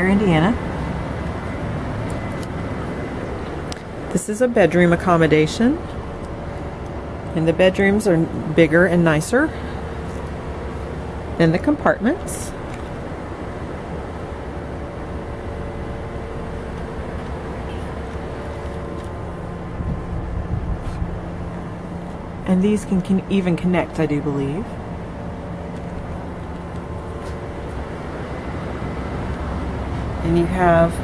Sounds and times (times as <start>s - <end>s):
Speech: 0.0s - 0.6s, 4.1s - 5.8s, 7.4s - 9.6s, 11.4s - 12.6s, 22.5s - 24.7s, 30.2s - 31.0s.